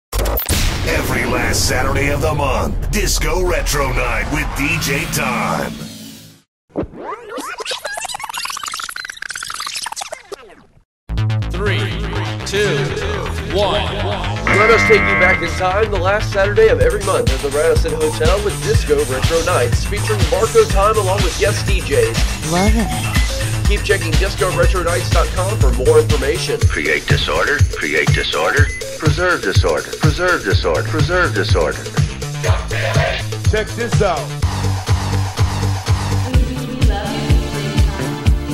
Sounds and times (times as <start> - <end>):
Speech: 0.8 - 5.8, 11.6 - 22.9, 23.6 - 31.9, 32.5 - 34.3.